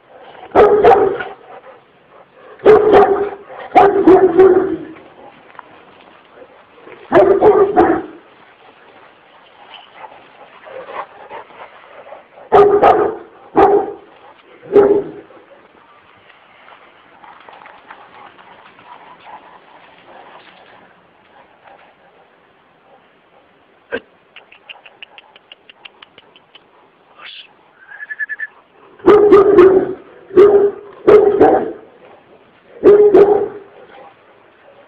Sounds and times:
Bow-wow: 0:00.2 - 0:01.4, 0:02.5 - 0:05.0, 0:07.1 - 0:08.2, 0:12.5 - 0:15.4, 0:28.4 - 0:31.9, 0:32.8 - 0:34.8.

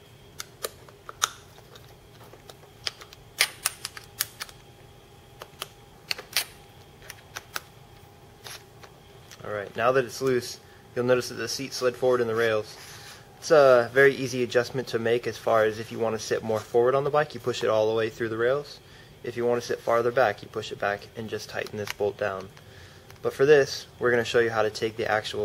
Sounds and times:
Speech: 0:09.4 - 0:12.8, 0:13.4 - 0:22.5, 0:23.2 - 0:25.4.

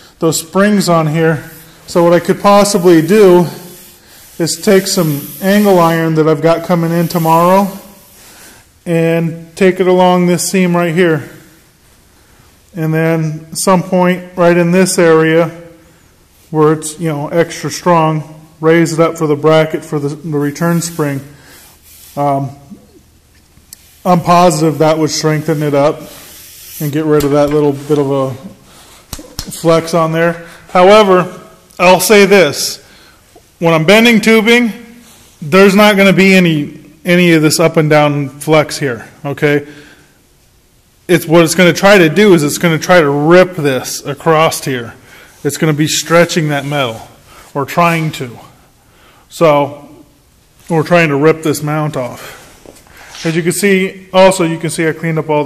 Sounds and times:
Inside, large room or hall: 0:00.0 - 0:55.4
Speech: 0:00.2 - 0:03.7, 0:04.4 - 0:08.0, 0:08.8 - 0:11.5, 0:12.7 - 0:15.8, 0:16.5 - 0:21.4, 0:22.2 - 0:22.8, 0:24.0 - 0:26.2, 0:26.8 - 0:28.6, 0:29.3 - 0:32.8, 0:33.6 - 0:39.7, 0:41.1 - 0:48.6, 0:49.3 - 0:50.1, 0:50.7 - 0:52.4, 0:53.2 - 0:55.4.

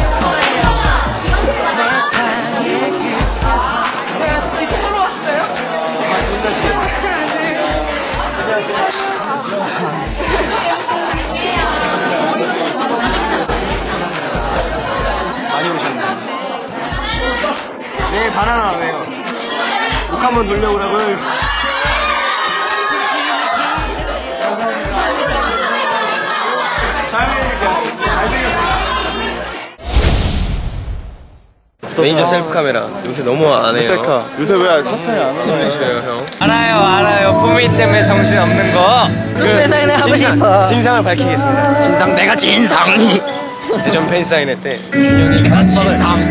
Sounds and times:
Speech: 0:00.0 - 0:29.7, 0:31.8 - 0:46.3
Music: 0:00.0 - 0:29.8, 0:36.4 - 0:46.3.

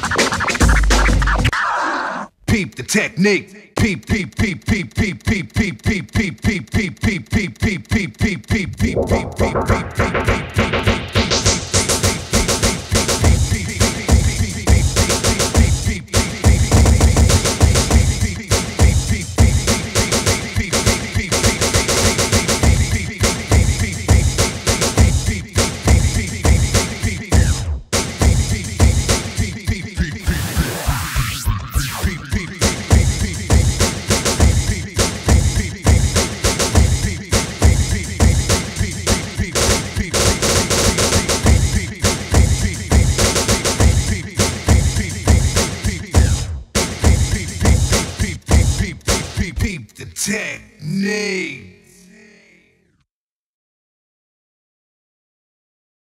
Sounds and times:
House music: 0:00.0 - 0:01.5, 0:08.5 - 0:49.4.

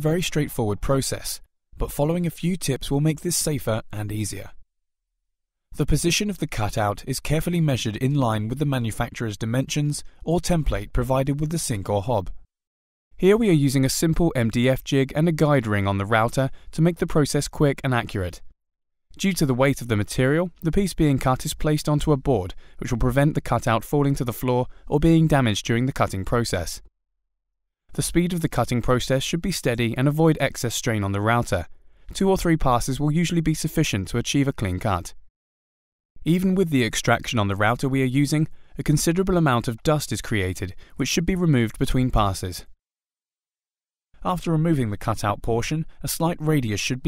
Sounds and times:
Speech: 0:00.0 - 0:04.6, 0:05.8 - 0:12.4, 0:13.2 - 0:18.5, 0:19.2 - 0:26.9, 0:27.9 - 0:35.2, 0:36.2 - 0:42.8, 0:44.2 - 0:47.0.

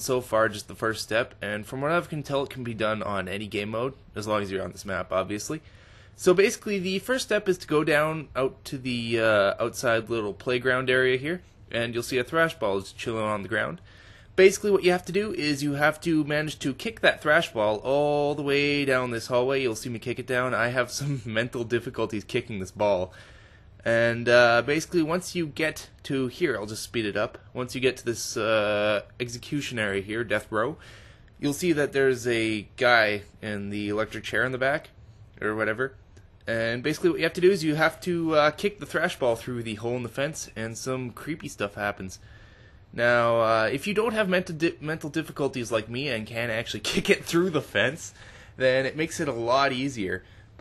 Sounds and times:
Speech: 0:00.0 - 0:05.6, 0:06.2 - 0:13.8, 0:14.4 - 0:23.2, 0:23.8 - 0:30.8, 0:31.4 - 0:42.2, 0:42.9 - 0:50.6.

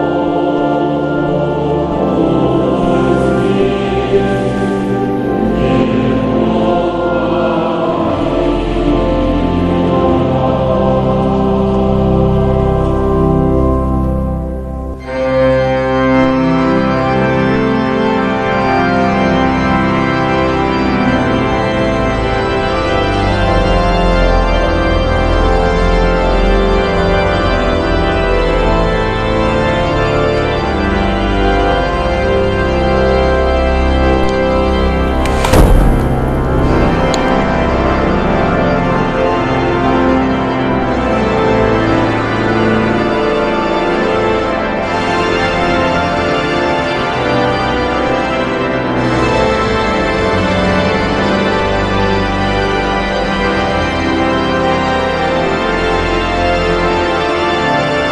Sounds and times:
Music: 0:00.0 - 0:58.1.

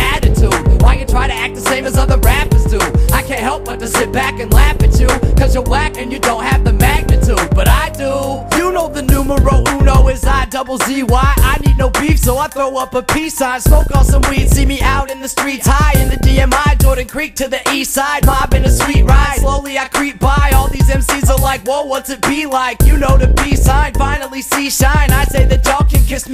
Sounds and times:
Rhythm and blues: 0:00.0 - 0:26.3.

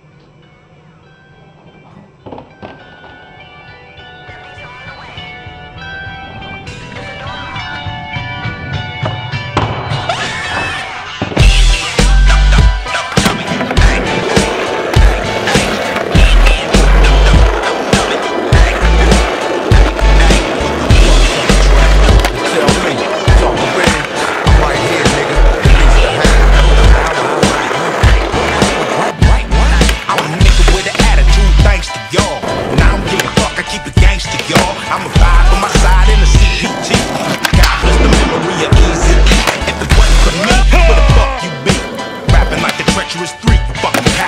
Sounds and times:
Music: 0:00.0 - 0:44.2
Skateboard: 0:09.0 - 0:44.2.

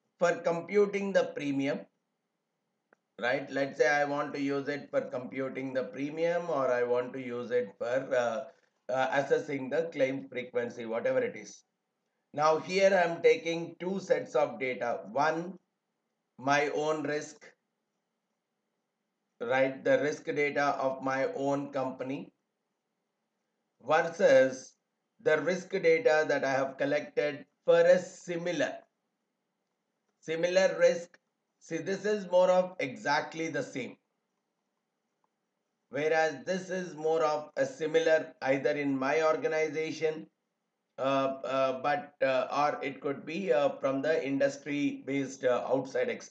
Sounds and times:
Speech: 0:00.2 - 0:01.9, 0:03.2 - 0:11.6, 0:12.4 - 0:15.6, 0:16.4 - 0:17.5, 0:19.4 - 0:22.3, 0:23.9 - 0:24.7, 0:25.3 - 0:28.8, 0:30.3 - 0:31.1, 0:31.7 - 0:34.0, 0:36.0 - 0:40.3, 0:41.0 - 0:46.3.

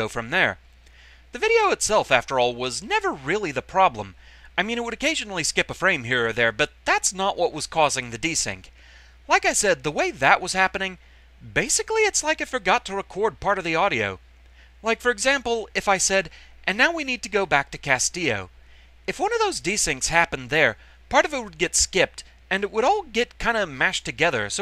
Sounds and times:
Speech: 0:00.0 - 0:00.6, 0:01.4 - 0:08.7, 0:09.3 - 0:14.2, 0:14.8 - 0:18.5, 0:19.1 - 0:24.6.

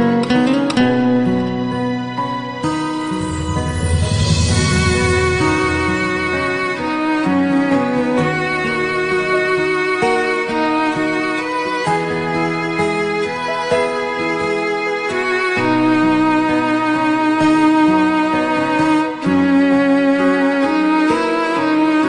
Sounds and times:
Music: 0:00.0 - 0:22.0.

